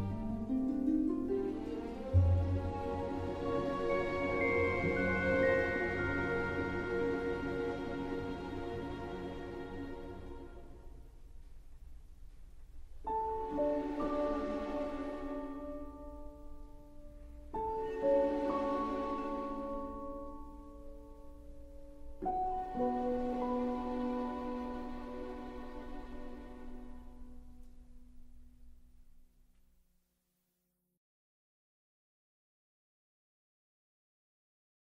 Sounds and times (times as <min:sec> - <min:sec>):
Music: 0:00.0 - 0:30.7.